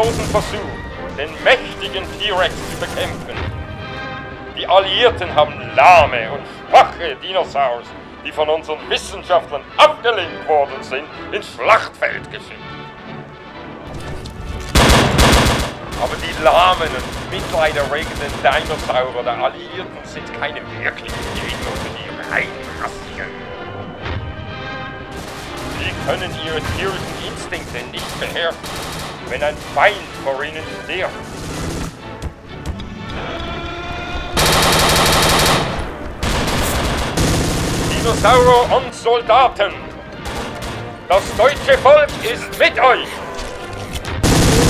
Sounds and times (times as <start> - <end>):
Fusillade: 0.0 - 0.7, 14.8 - 19.2, 21.1 - 23.0, 25.1 - 30.3, 31.1 - 32.0, 34.4 - 38.7, 40.2 - 42.5, 44.2 - 44.7
Speech: 0.0 - 3.4, 4.6 - 12.6, 16.0 - 23.3, 25.8 - 28.6, 29.3 - 31.2, 37.9 - 39.8, 41.1 - 43.2
Music: 0.0 - 44.7.